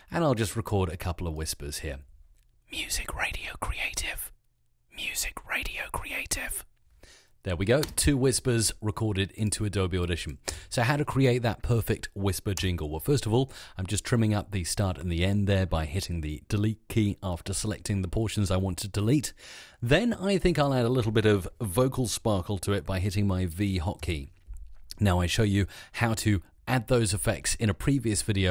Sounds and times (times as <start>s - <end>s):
Speech: 0.1s - 2.1s, 7.4s - 28.5s.